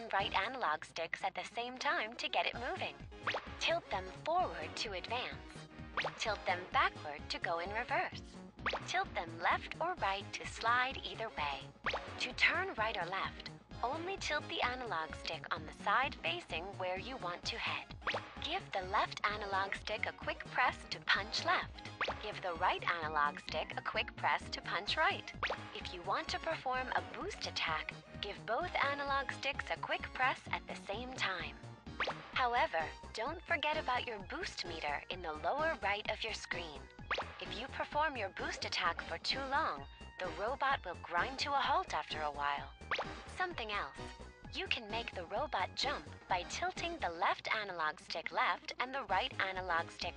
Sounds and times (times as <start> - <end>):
Speech: 0.0 - 3.0, 3.6 - 5.5, 6.1 - 8.2, 8.9 - 31.6, 32.4 - 36.8, 37.4 - 42.7, 43.3 - 50.1.